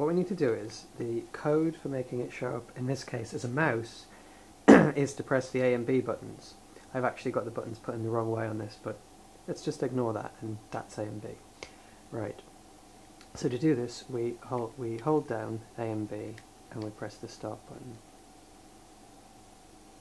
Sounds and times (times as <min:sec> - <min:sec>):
Speech: 0:00.0 - 0:04.1, 0:04.7 - 0:11.4, 0:12.1 - 0:12.5, 0:13.3 - 0:18.0.